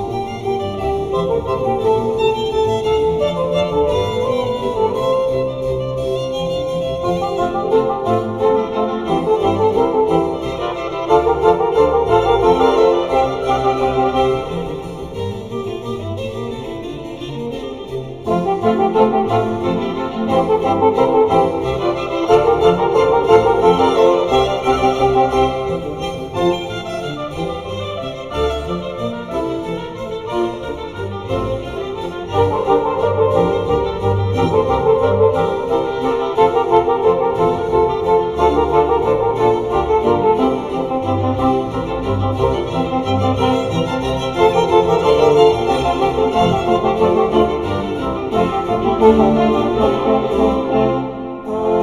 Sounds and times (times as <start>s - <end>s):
French horn: 0.0s - 51.8s.